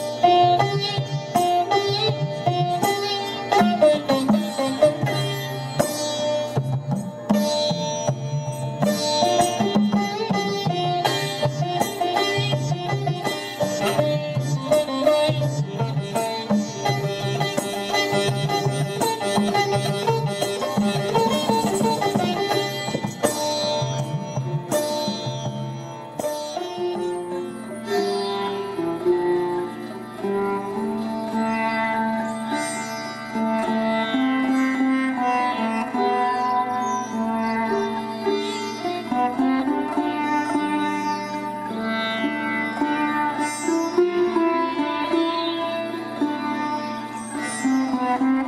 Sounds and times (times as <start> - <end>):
Sitar: 0.0 - 48.4.